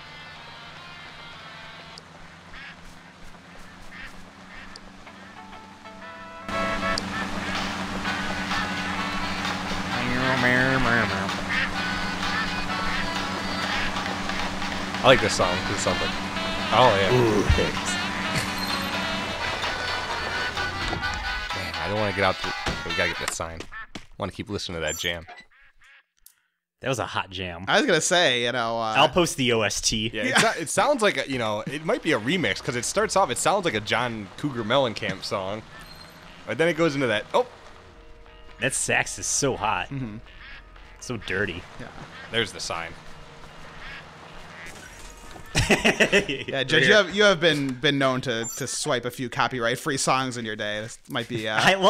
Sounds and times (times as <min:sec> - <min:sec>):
Music: 0:00.0 - 0:02.0, 0:04.7 - 0:23.6, 0:31.5 - 0:48.2
Speech: 0:09.9 - 0:11.3, 0:15.0 - 0:16.1, 0:16.7 - 0:18.0, 0:21.5 - 0:25.2, 0:26.8 - 0:35.6, 0:36.5 - 0:37.5, 0:38.6 - 0:40.2, 0:41.0 - 0:43.0, 0:46.3 - 0:51.9.